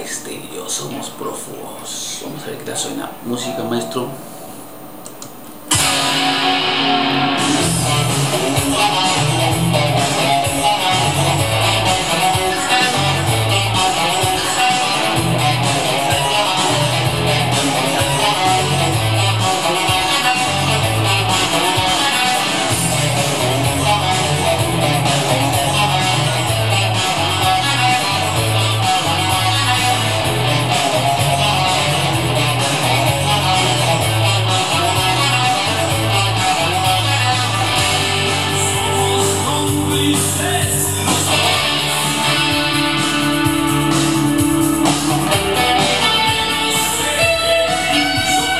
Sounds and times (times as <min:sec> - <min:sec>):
Electric guitar: 0:05.1 - 0:48.5.